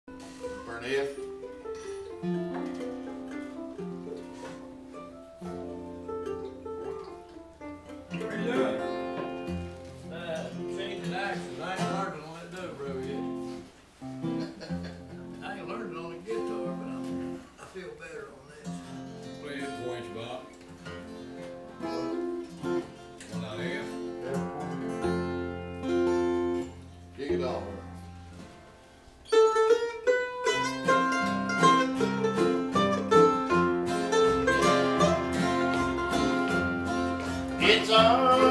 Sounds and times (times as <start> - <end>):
Guitar: 0.0 - 38.5.